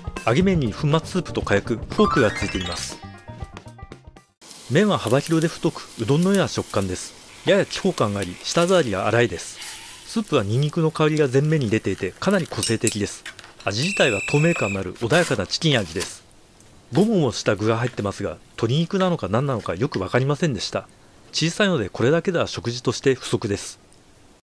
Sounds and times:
Speech: 0:00.2 - 0:03.0, 0:04.7 - 0:16.3, 0:16.9 - 0:23.8.

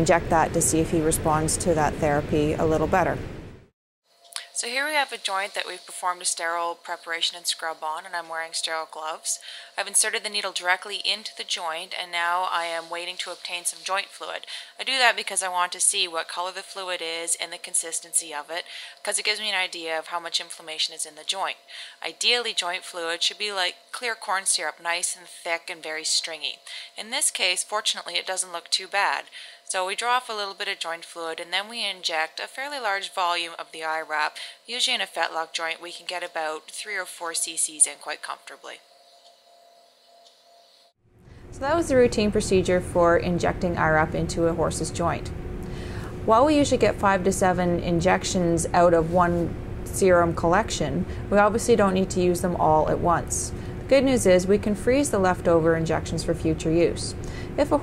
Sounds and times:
Speech: 0:00.0 - 0:03.2, 0:04.4 - 0:38.8, 0:41.6 - 0:45.3, 0:46.3 - 0:57.8.

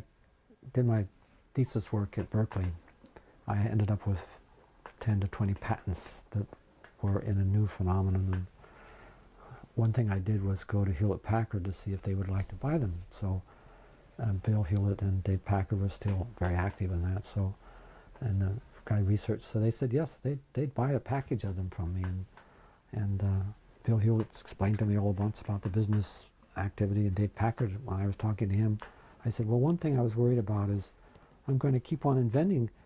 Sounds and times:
Speech: 0:00.0 - 0:02.8, 0:03.4 - 0:08.6, 0:09.6 - 0:13.5, 0:14.2 - 0:17.6, 0:18.2 - 0:22.3, 0:22.9 - 0:32.8.

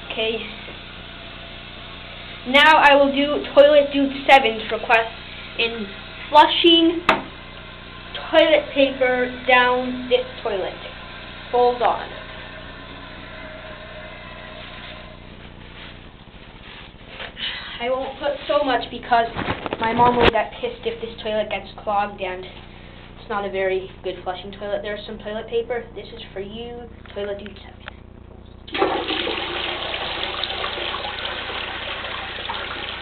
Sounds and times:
Speech: 0:00.1 - 0:00.6, 0:02.5 - 0:07.0, 0:08.2 - 0:10.9, 0:11.5 - 0:12.2, 0:17.8 - 0:22.6, 0:23.2 - 0:27.9
Toilet flush: 0:07.3 - 0:15.2, 0:28.7 - 0:33.0.

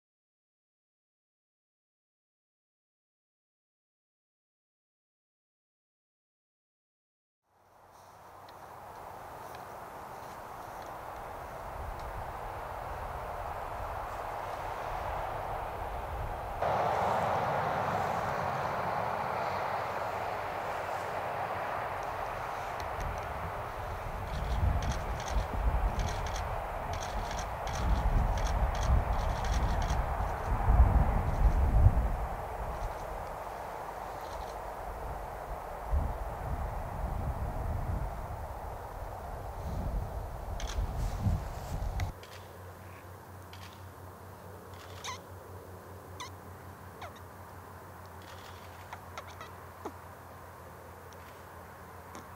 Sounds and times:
Animal: 0:21.7 - 0:30.5, 0:44.7 - 0:45.3, 0:46.1 - 0:47.3, 0:48.2 - 0:50.0.

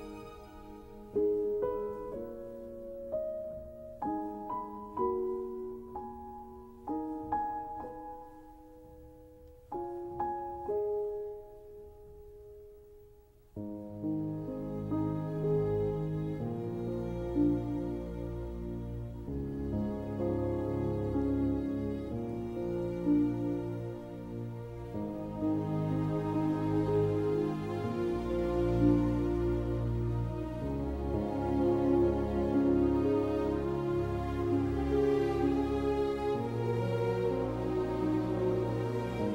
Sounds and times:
Music: 0:00.0 - 0:39.3.

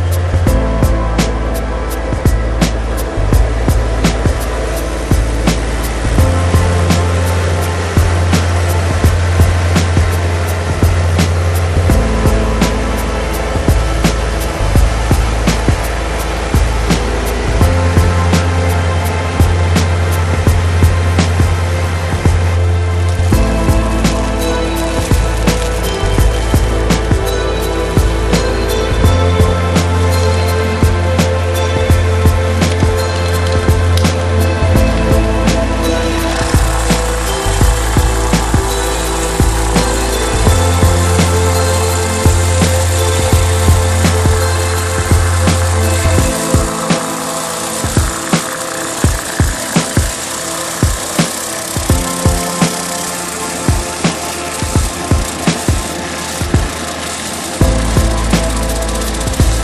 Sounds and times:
Lawn mower: 0:00.0 - 0:59.6
Music: 0:00.0 - 0:59.6
Vehicle: 0:00.0 - 0:59.6.

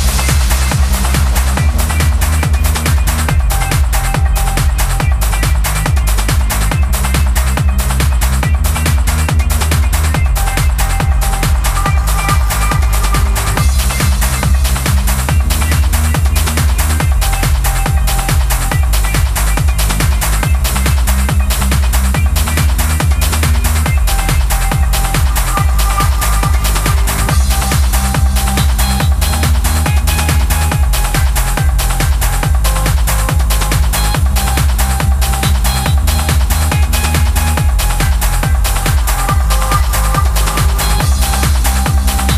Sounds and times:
Trance music: 0:00.0 - 0:42.3.

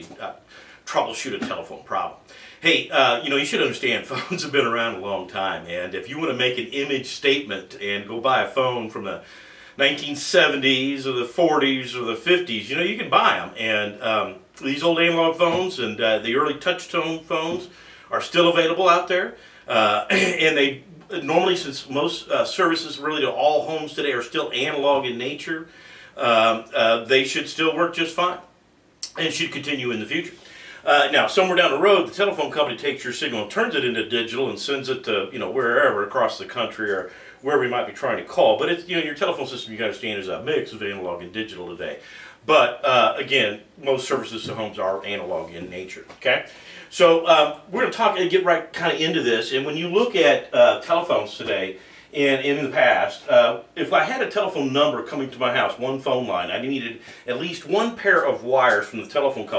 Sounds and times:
Speech: 0:00.0 - 0:59.5.

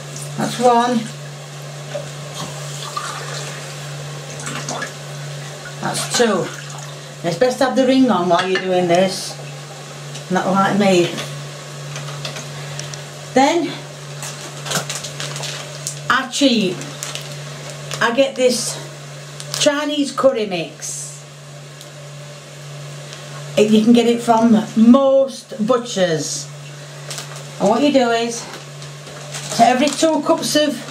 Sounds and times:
Speech: 0:00.4 - 0:01.2, 0:05.8 - 0:06.6, 0:07.2 - 0:09.4, 0:10.3 - 0:11.3, 0:13.4 - 0:13.8, 0:16.1 - 0:16.9, 0:18.0 - 0:18.9, 0:19.6 - 0:21.2, 0:23.6 - 0:26.5, 0:27.6 - 0:28.6, 0:29.5 - 0:30.9.

